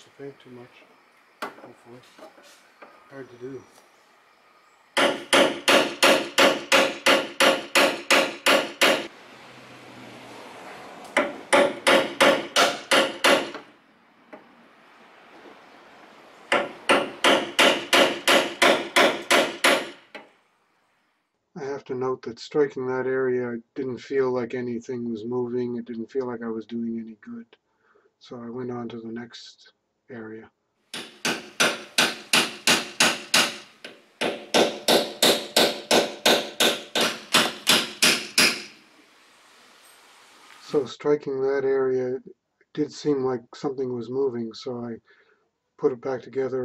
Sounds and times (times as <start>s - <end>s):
Hammer: 5.0s - 9.1s, 11.2s - 13.6s, 16.5s - 20.0s, 31.0s - 38.7s.